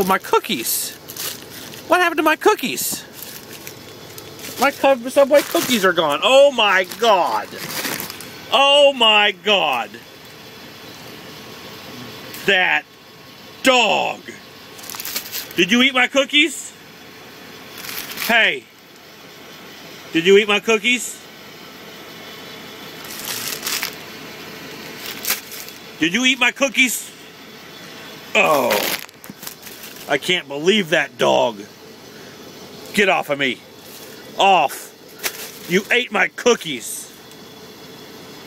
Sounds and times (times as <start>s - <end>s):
Speech: 0.0s - 1.0s, 1.9s - 3.1s, 4.6s - 7.6s, 8.5s - 10.0s, 12.0s - 12.9s, 13.6s - 14.4s, 15.6s - 16.8s, 18.2s - 18.7s, 20.1s - 21.2s, 26.0s - 27.2s, 28.4s - 29.0s, 30.1s - 31.7s, 32.9s - 33.6s, 34.4s - 35.0s, 35.7s - 37.2s.